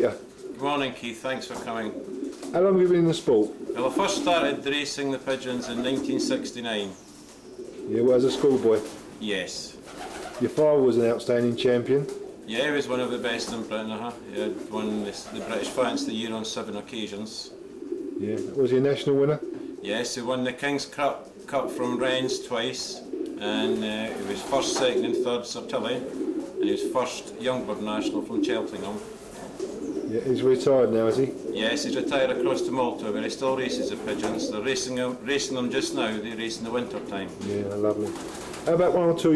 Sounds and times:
Coo: 1.6s - 2.6s, 3.4s - 4.6s, 5.4s - 8.9s, 17.5s - 20.0s, 21.4s - 38.7s.

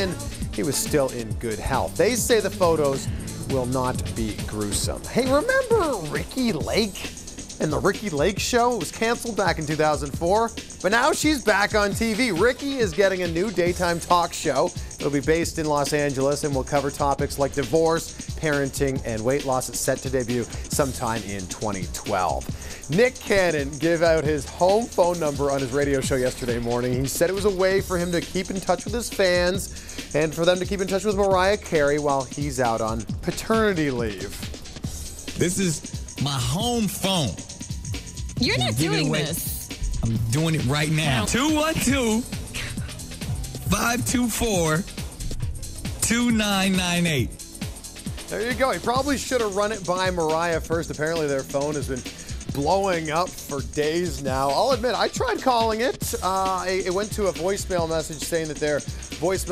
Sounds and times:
Speech: 0.0s - 34.4s, 35.4s - 37.4s, 38.4s - 42.3s, 43.6s - 44.9s, 46.0s - 47.3s, 48.3s - 59.5s
Music: 0.0s - 59.5s.

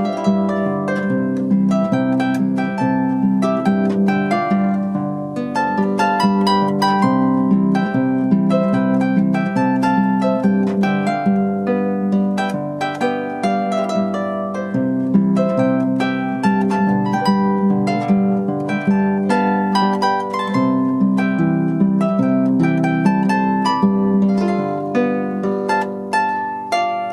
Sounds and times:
Harp: 0.0s - 27.1s.

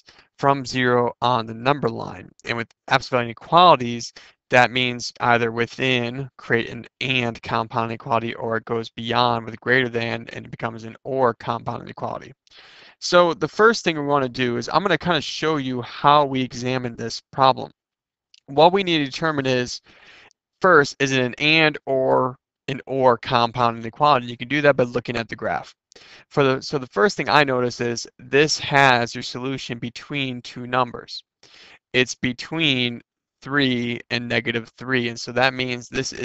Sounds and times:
Speech: 0.0s - 17.7s, 18.4s - 19.9s, 20.6s - 36.2s.

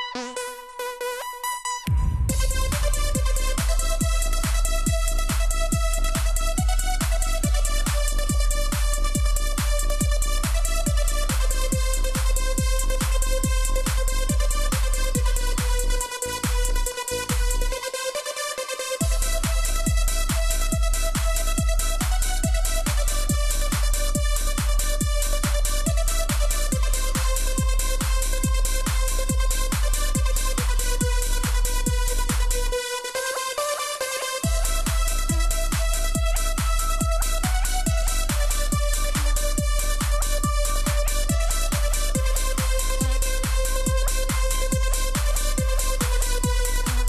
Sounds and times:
Electronica: 0.0s - 47.0s.

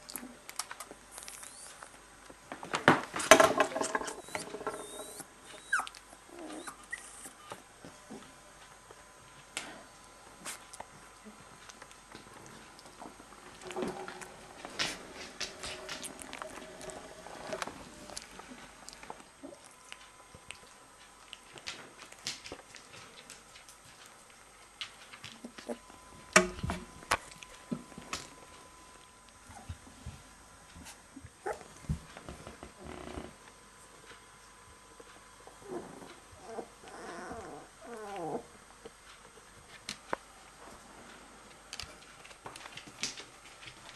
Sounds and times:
Dog: 4.0s - 7.6s, 30.8s - 31.8s, 35.6s - 38.5s.

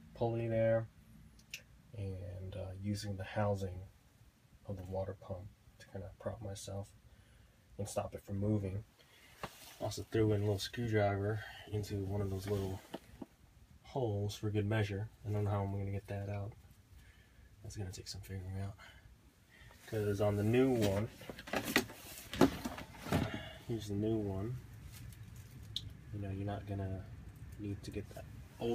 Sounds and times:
Speech: 0.1s - 0.9s, 1.9s - 3.9s, 4.6s - 7.0s, 7.8s - 8.9s, 9.8s - 13.0s, 13.8s - 16.6s, 17.6s - 19.0s, 19.9s - 21.2s, 23.7s - 24.6s, 26.1s - 28.7s.

